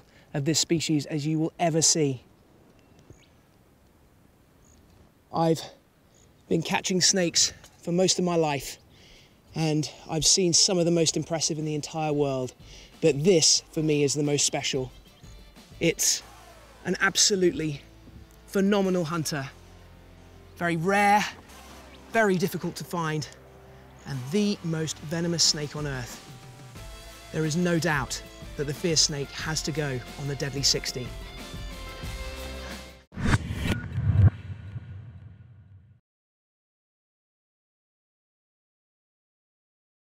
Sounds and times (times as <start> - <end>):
Speech: 0.3 - 2.2, 5.3 - 5.8, 6.5 - 8.8, 9.5 - 14.9, 15.8 - 17.8, 18.5 - 19.6, 20.6 - 21.4, 22.1 - 23.4, 24.0 - 26.2, 27.3 - 31.1.